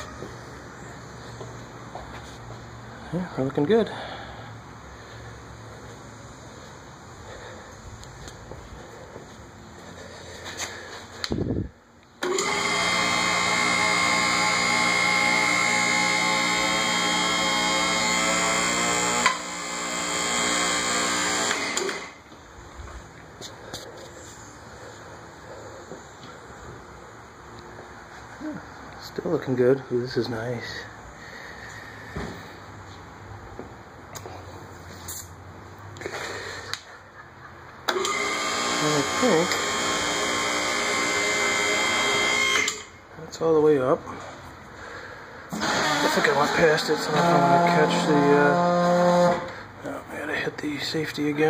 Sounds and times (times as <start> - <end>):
Speech: 3.1 - 4.0, 28.4 - 30.9, 38.8 - 39.5, 43.2 - 44.1, 46.0 - 48.7, 49.8 - 51.4.